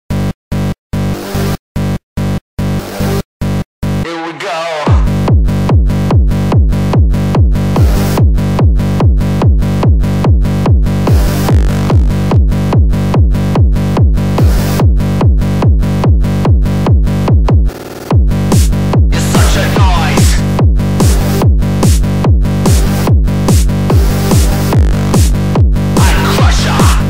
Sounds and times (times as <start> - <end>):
Music: 0.1 - 27.1.